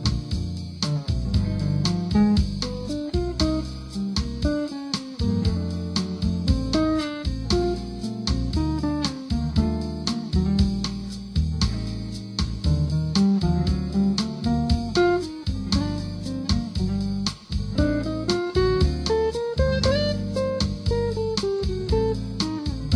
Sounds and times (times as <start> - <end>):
Acoustic guitar: 0.0 - 22.9.